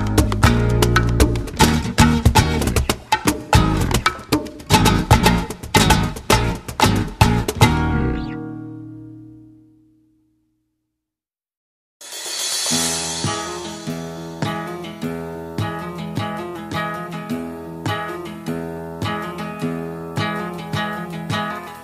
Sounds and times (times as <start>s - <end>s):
Music: 0.0s - 11.0s, 12.0s - 21.8s.